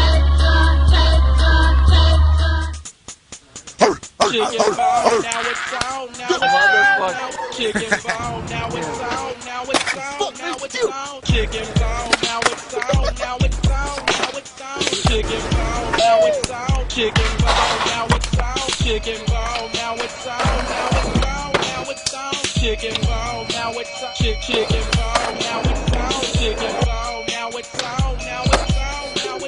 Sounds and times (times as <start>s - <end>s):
Music: 0.0s - 29.4s.